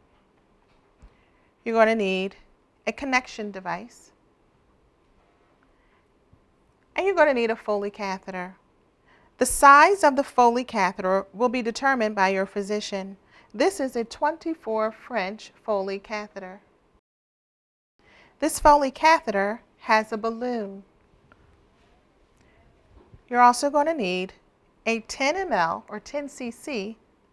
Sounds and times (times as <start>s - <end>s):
Speech: 1.7s - 4.2s, 7.0s - 8.6s, 9.4s - 16.6s, 18.4s - 20.9s, 23.3s - 27.0s.